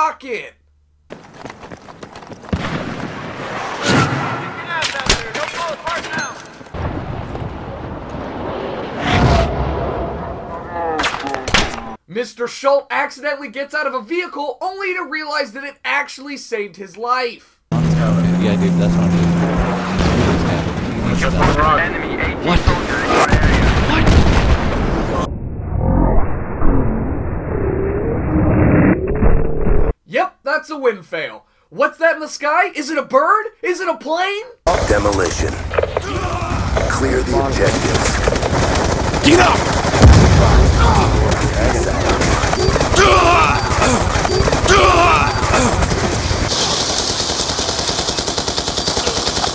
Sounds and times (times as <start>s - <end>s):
Speech: 0.0s - 0.6s, 12.1s - 19.2s, 20.5s - 24.1s, 30.1s - 38.0s.